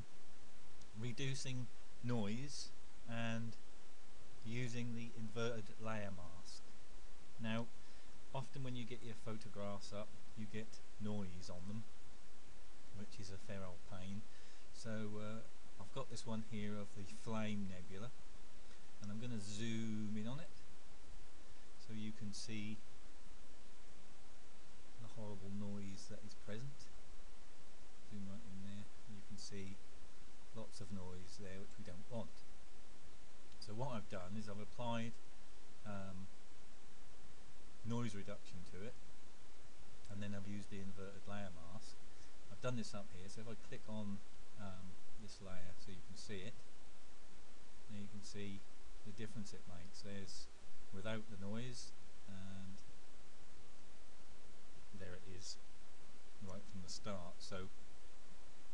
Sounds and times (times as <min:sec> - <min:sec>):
Speech: 0:00.9 - 0:03.6, 0:04.4 - 0:06.7, 0:07.4 - 0:07.7, 0:08.3 - 0:11.9, 0:12.9 - 0:18.2, 0:19.0 - 0:20.6, 0:21.8 - 0:22.8, 0:25.0 - 0:27.0, 0:28.1 - 0:29.8, 0:30.5 - 0:32.4, 0:33.6 - 0:35.2, 0:35.8 - 0:36.3, 0:37.8 - 0:39.0, 0:40.1 - 0:46.7, 0:47.9 - 0:52.9, 0:54.9 - 0:55.6, 0:56.4 - 0:57.8.